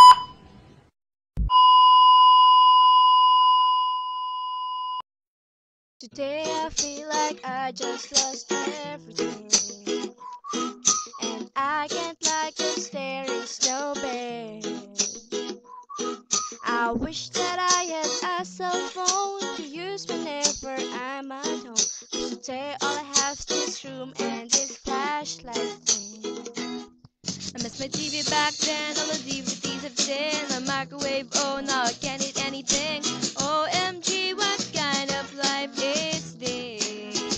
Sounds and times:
Music: 6.1 - 37.3.

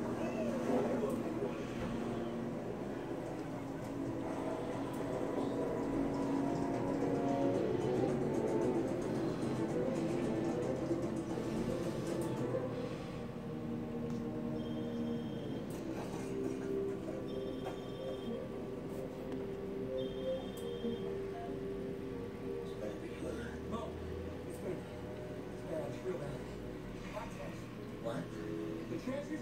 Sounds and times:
Music: 0.0 - 29.4
Speech: 25.7 - 29.4.

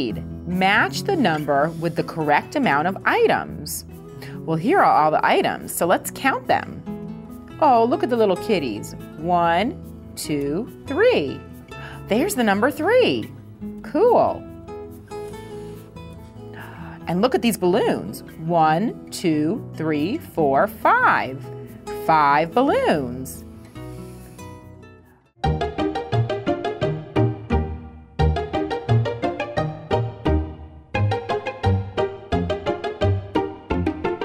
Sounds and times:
Speech: 0.0 - 3.8, 4.5 - 6.8, 7.6 - 11.4, 12.1 - 14.4, 17.1 - 21.4, 22.0 - 23.4
Music: 0.0 - 34.2.

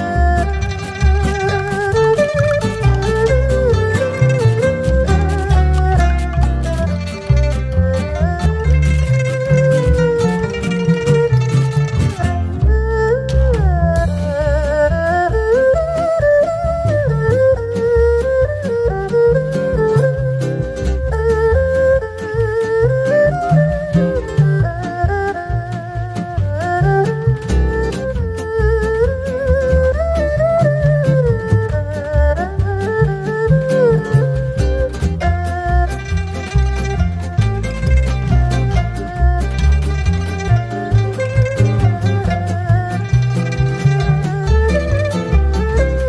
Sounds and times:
Music: 0.0 - 46.0.

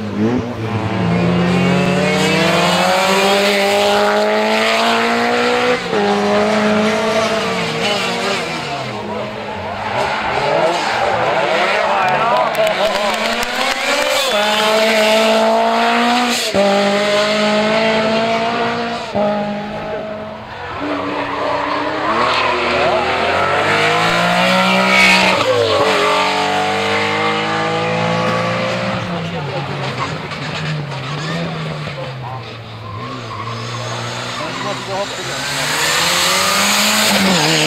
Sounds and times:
Speech: 11.3 - 14.5, 29.0 - 30.1, 34.4 - 35.8.

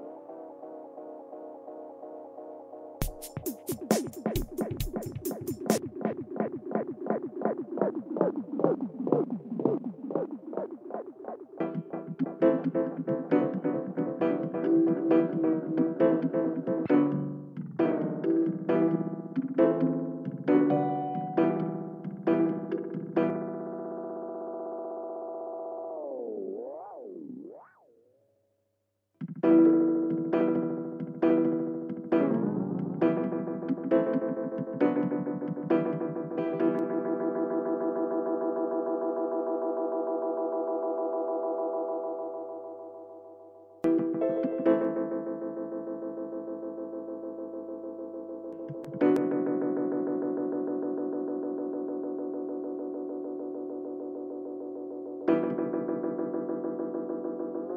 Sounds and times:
Music: 0.0 - 57.7.

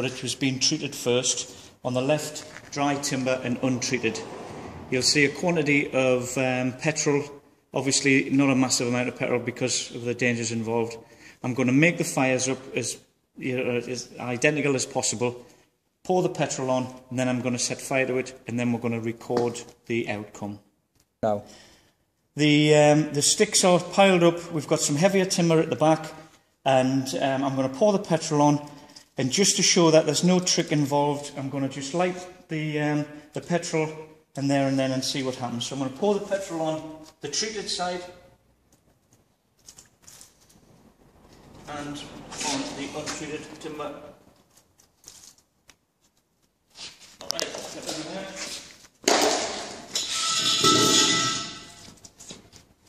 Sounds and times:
Speech: 0.0 - 4.2, 4.9 - 15.4, 16.0 - 21.5, 22.4 - 38.3, 41.7 - 44.2, 47.2 - 48.6.

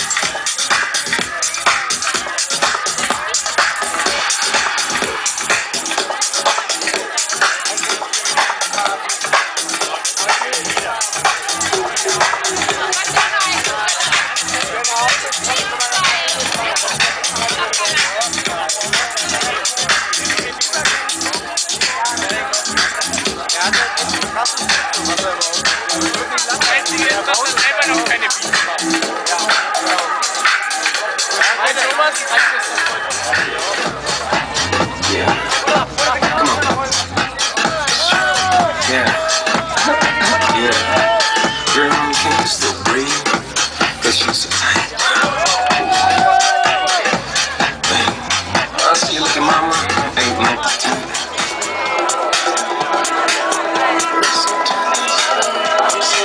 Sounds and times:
Music: 0.0 - 56.2
Speech: 0.0 - 56.2.

